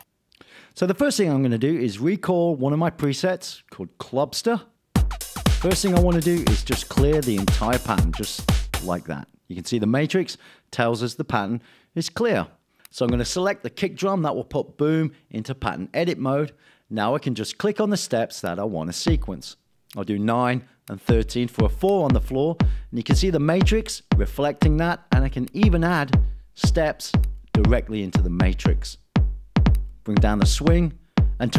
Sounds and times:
Speech: 0.8 - 4.8, 5.6 - 29.0, 30.1 - 31.5
Drum machine: 5.0 - 9.1, 13.1 - 13.4, 19.1 - 19.4, 21.1 - 31.5.

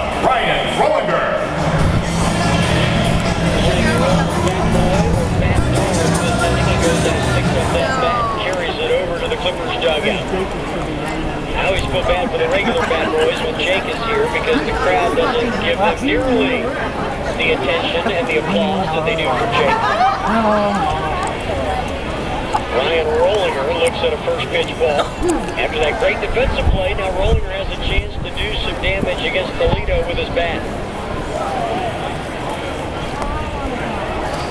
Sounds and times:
Speech: 3.6 - 21.9, 22.6 - 30.7.

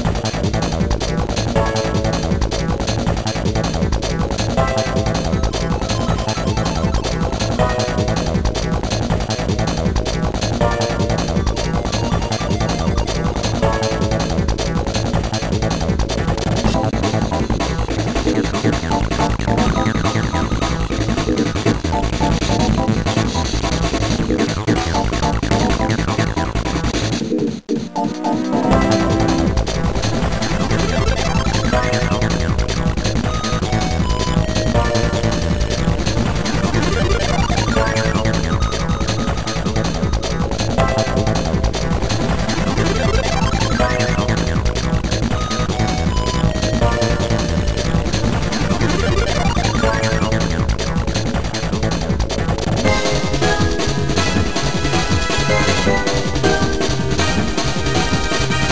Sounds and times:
Techno: 0.0 - 58.7.

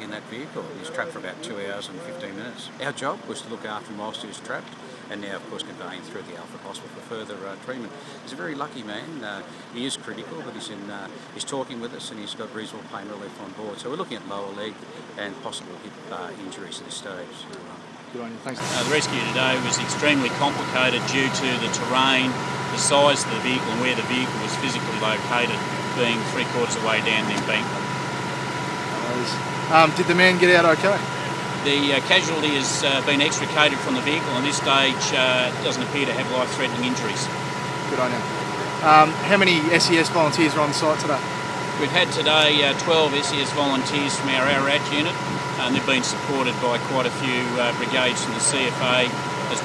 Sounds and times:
Speech: 0.0 - 27.7, 29.0 - 37.3, 37.9 - 41.2, 41.8 - 49.6.

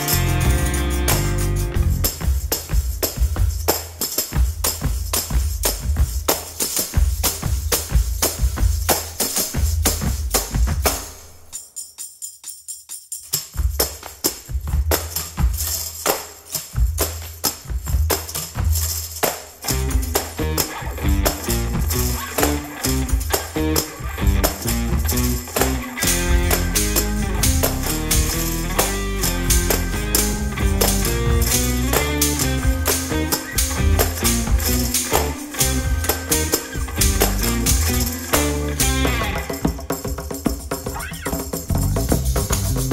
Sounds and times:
Tambourine: 0.0 - 42.9.

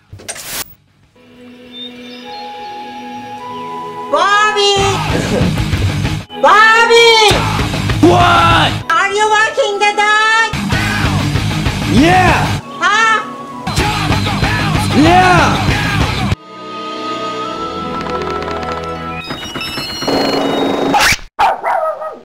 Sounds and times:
Music: 1.2 - 20.4
Bow-wow: 21.0 - 22.2.

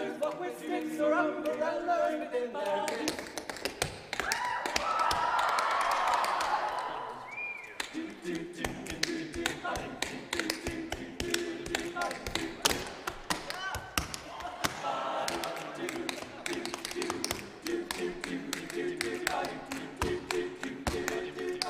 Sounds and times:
Choir: 0.0 - 13.5, 14.1 - 21.6
A capella: 0.0 - 21.6.

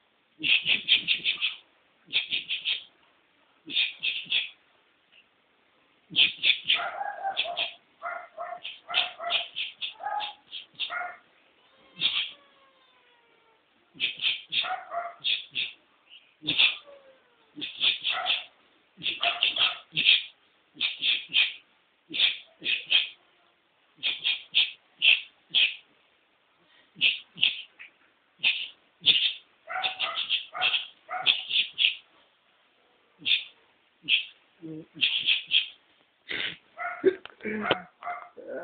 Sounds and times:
Domestic animals, pets: 6.2 - 15.8, 16.4 - 23.2, 24.0 - 25.8, 27.0 - 32.1, 36.8 - 38.6.

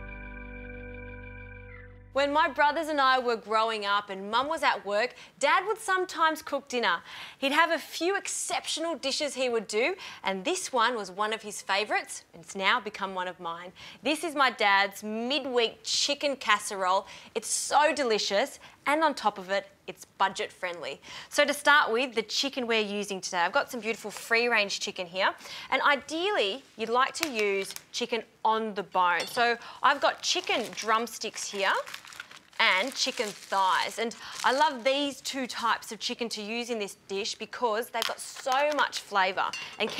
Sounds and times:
Speech: 2.2 - 31.9, 32.6 - 39.9.

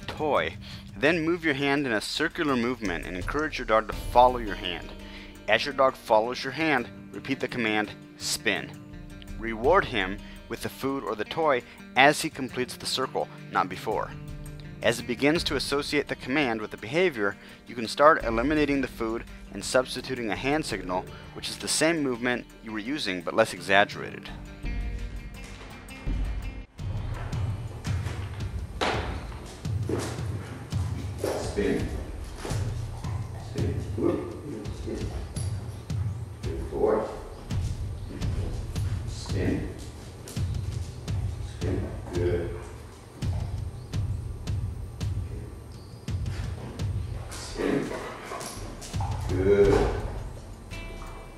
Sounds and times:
Speech: 0.0 - 4.9, 5.5 - 8.8, 9.4 - 14.2, 14.8 - 24.4, 31.3 - 32.0, 33.5 - 35.2, 36.4 - 37.3, 38.1 - 39.8, 41.6 - 42.7, 47.4 - 47.9, 49.3 - 50.0
Music: 0.0 - 51.3.

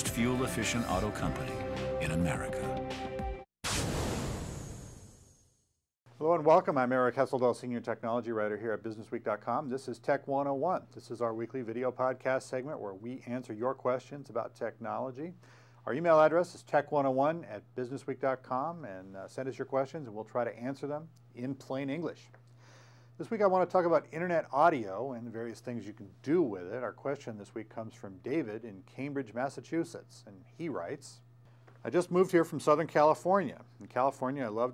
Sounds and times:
Speech: 0.0 - 2.7, 6.2 - 22.3, 23.2 - 31.2, 31.8 - 34.7.

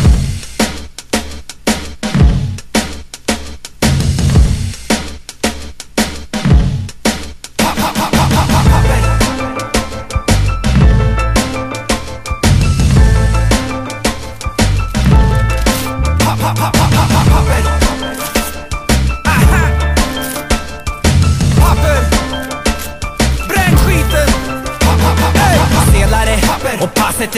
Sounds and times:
Music: 0.0 - 27.3.

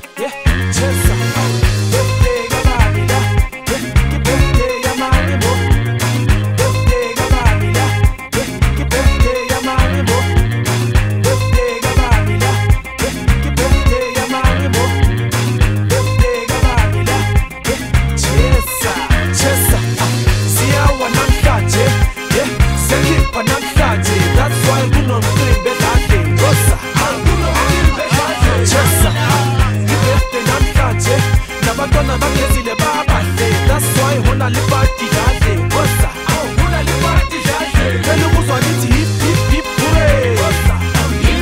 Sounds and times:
Music: 0.0 - 41.4.

